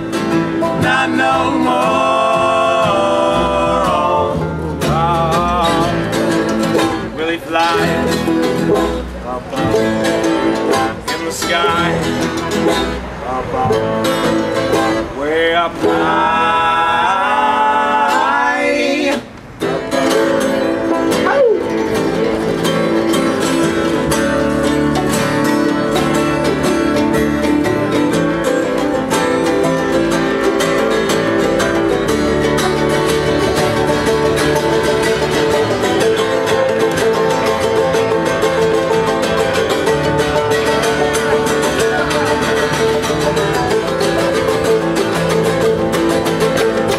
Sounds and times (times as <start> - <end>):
Country: 0.0 - 46.9
Flamenco: 0.0 - 46.9.